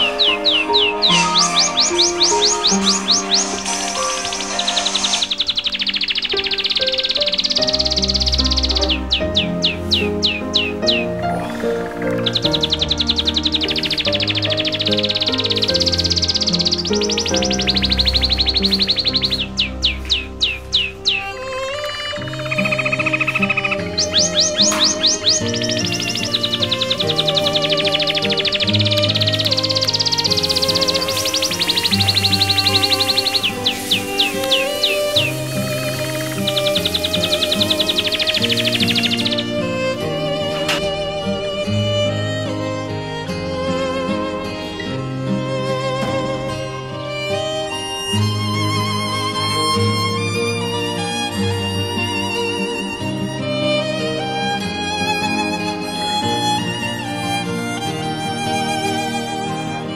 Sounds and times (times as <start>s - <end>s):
Chirp, tweet: 0.0s - 21.4s, 22.2s - 39.7s.